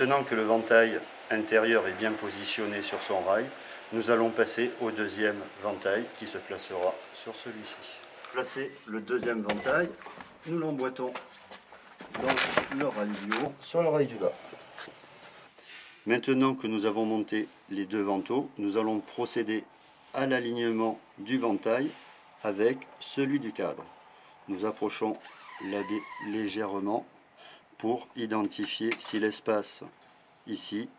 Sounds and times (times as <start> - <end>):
Speech: 0.0 - 11.2, 12.2 - 14.4, 16.1 - 23.9, 24.5 - 27.1, 27.8 - 30.9.